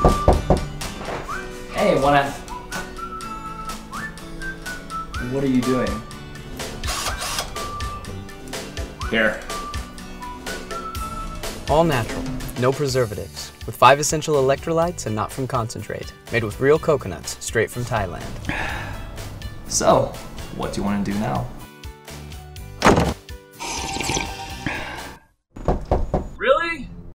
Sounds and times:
Music: 0:00.0 - 0:25.2
Speech: 0:01.7 - 0:02.4, 0:11.7 - 0:18.3, 0:19.7 - 0:21.5, 0:26.4 - 0:26.9
Gurgling: 0:23.6 - 0:24.6.

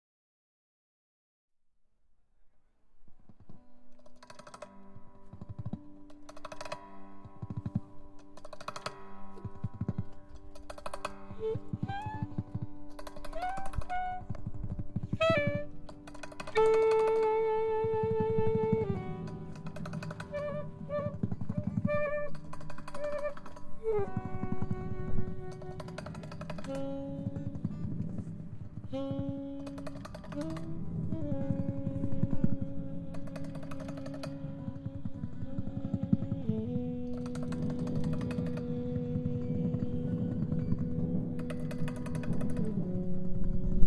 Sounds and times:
Music: 0:02.1 - 0:43.8.

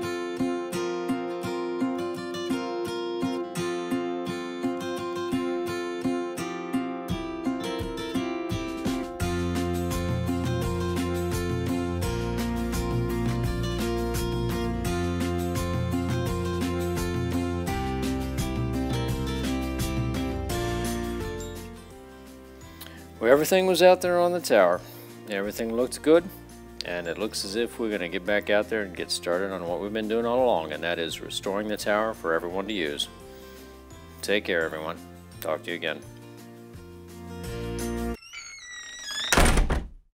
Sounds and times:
Music: 0:00.0 - 0:39.7
Speech: 0:23.2 - 0:33.1, 0:34.2 - 0:36.1.

